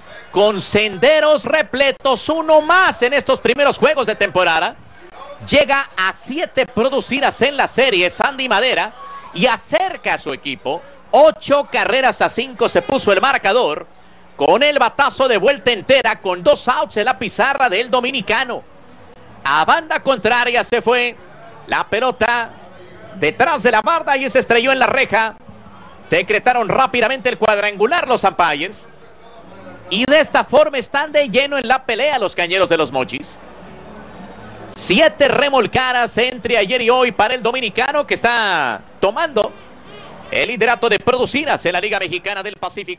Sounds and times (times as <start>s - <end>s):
Speech: 0.1s - 18.6s, 19.4s - 33.4s, 34.8s - 42.9s.